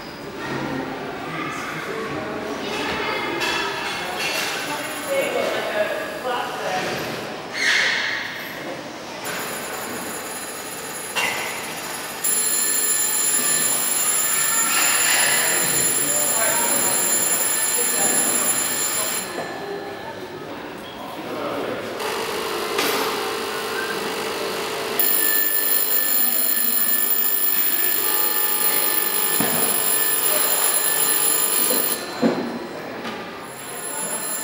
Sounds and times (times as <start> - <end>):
Telephone bell ringing: 9.2 - 20.3, 22.1 - 32.8, 33.4 - 34.4.